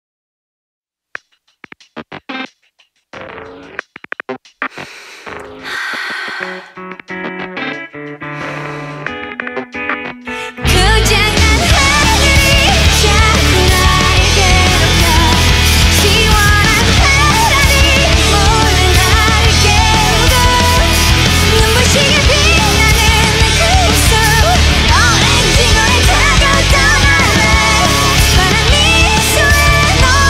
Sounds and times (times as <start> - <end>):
Music: 1.2 - 30.2.